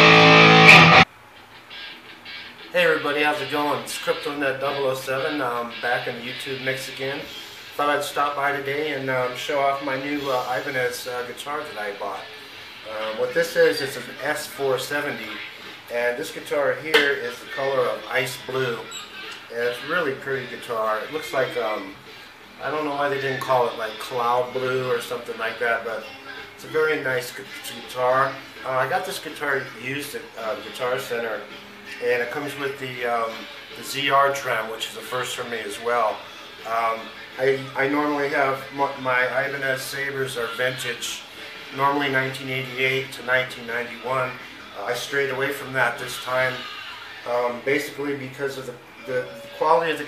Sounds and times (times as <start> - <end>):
Guitar: 0.0 - 50.0
Speech: 2.7 - 50.0.